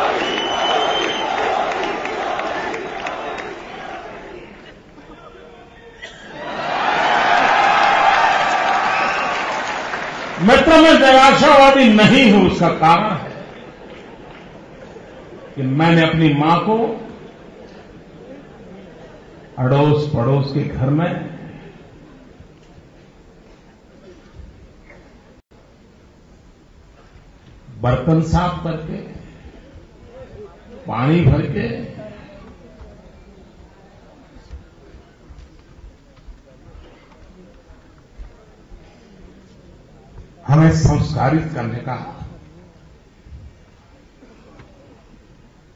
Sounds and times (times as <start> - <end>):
Male speech, man speaking: 10.4 - 13.4, 15.6 - 17.1, 19.6 - 21.5, 27.8 - 29.3, 30.1 - 32.3, 40.4 - 42.4.